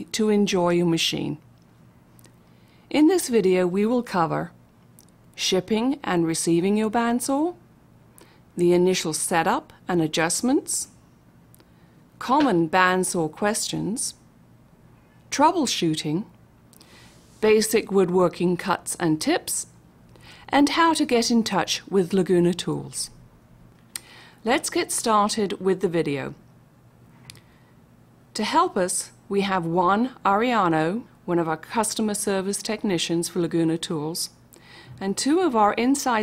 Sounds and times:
Speech: 0.0 - 1.4, 2.9 - 4.6, 5.4 - 7.6, 8.6 - 10.9, 12.2 - 14.2, 15.3 - 16.3, 17.4 - 19.7, 20.5 - 23.2, 24.4 - 26.4, 28.4 - 34.4, 35.0 - 36.2.

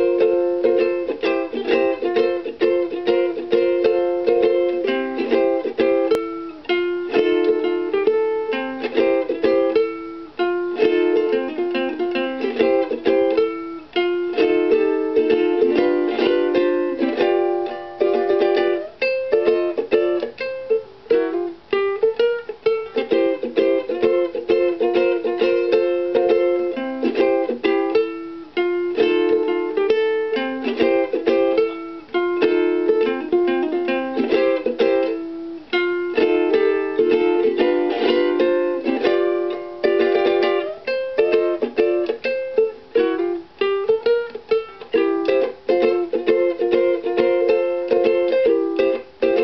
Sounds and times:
Inside, small room: 0.0 - 49.4
Ukulele: 0.0 - 49.4.

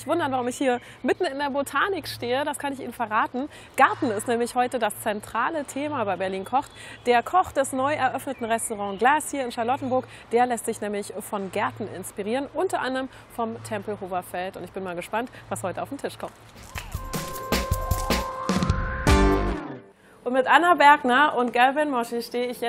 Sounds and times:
Speech: 0.0 - 16.3, 20.2 - 22.6.

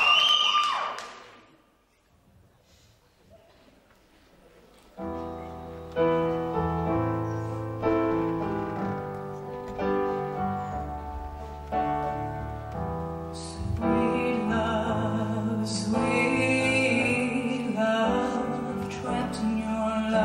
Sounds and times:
Music: 5.0 - 20.2
Female singing: 13.4 - 20.2.

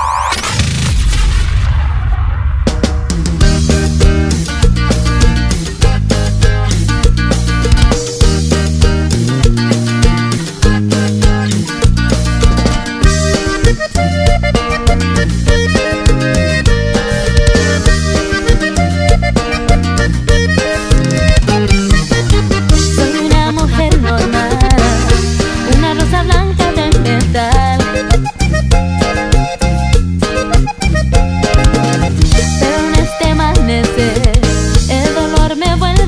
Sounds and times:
Pop music: 3.4 - 36.0.

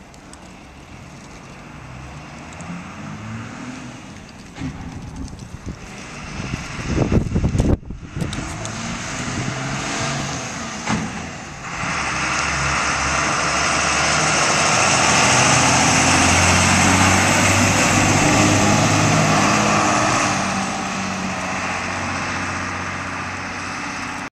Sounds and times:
Bus: 0.0 - 24.3.

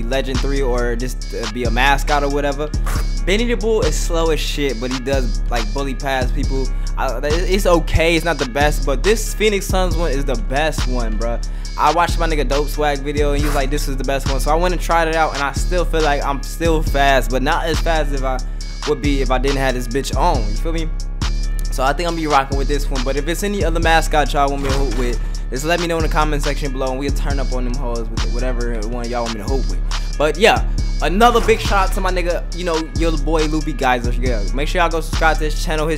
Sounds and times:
Speech: 0.0 - 20.9, 21.6 - 35.9
Music: 0.0 - 35.9.

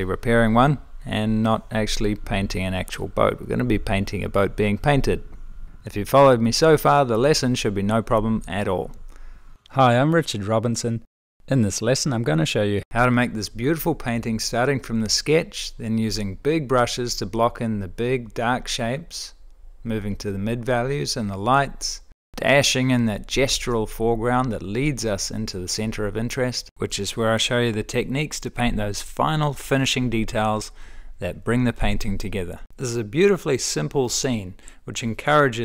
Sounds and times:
Speech: 0.0 - 9.0, 9.7 - 35.6.

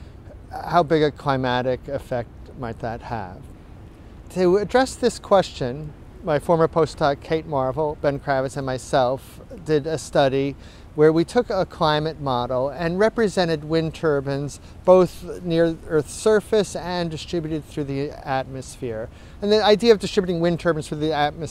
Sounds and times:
Speech: 0.3 - 3.5, 4.3 - 21.5.

